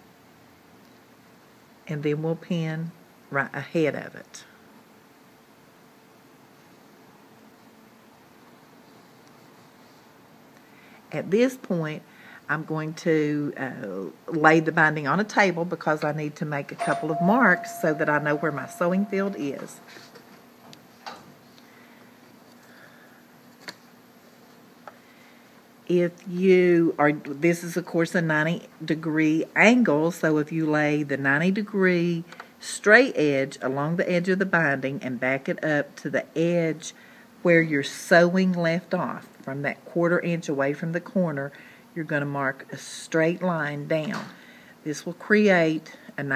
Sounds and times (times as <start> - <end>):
Speech: 1.9 - 4.6, 11.1 - 19.8, 25.9 - 46.3.